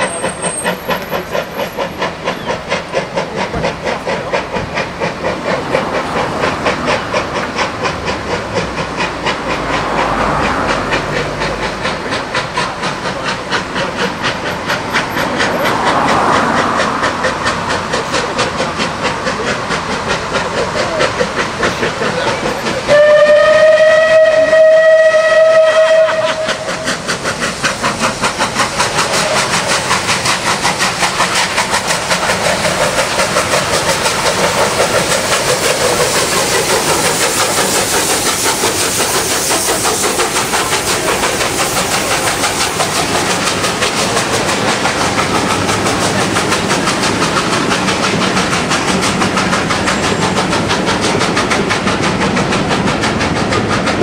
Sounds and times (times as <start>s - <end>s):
Railroad car, train wagon: 0.0s - 54.0s
Motor vehicle (road): 5.6s - 23.0s
Speech: 21.7s - 22.9s
Train horn: 22.9s - 26.7s
Train whistle: 22.9s - 26.9s.